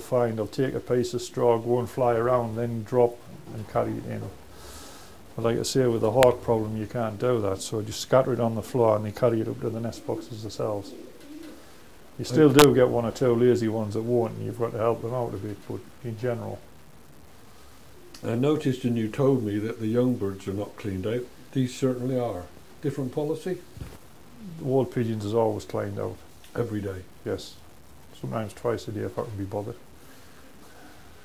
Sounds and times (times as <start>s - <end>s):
Speech: 0.0s - 4.4s, 5.4s - 11.0s, 12.2s - 16.7s, 18.2s - 23.7s, 24.4s - 27.6s, 28.2s - 29.8s.